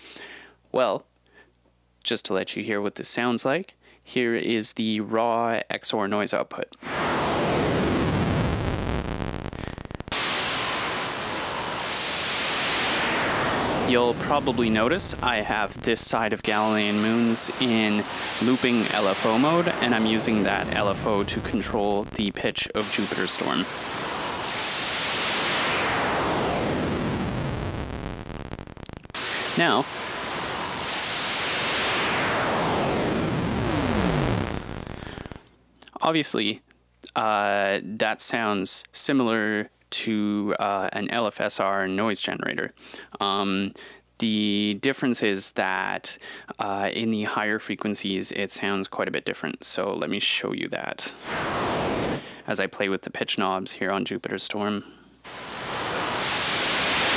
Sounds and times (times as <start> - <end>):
Speech: 0.7 - 1.1, 2.0 - 6.8, 13.8 - 23.7, 29.6 - 29.9, 35.8 - 51.2, 52.4 - 54.9
White noise: 6.8 - 35.5, 51.1 - 52.3, 55.2 - 57.1.